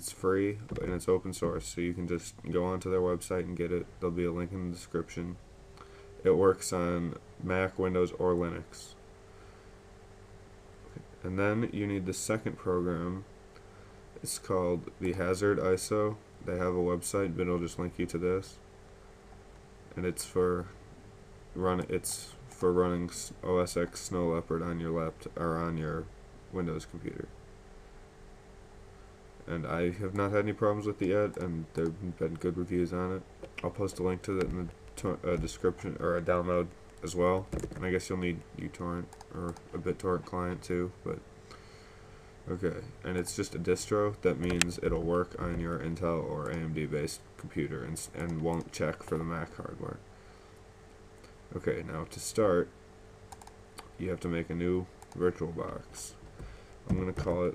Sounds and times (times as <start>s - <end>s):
Speech: 0.0s - 5.4s, 6.2s - 9.0s, 11.0s - 13.3s, 14.2s - 18.6s, 20.0s - 20.8s, 21.6s - 27.3s, 29.5s - 41.2s, 42.5s - 50.0s, 51.5s - 52.8s, 53.8s - 56.2s, 56.9s - 57.5s.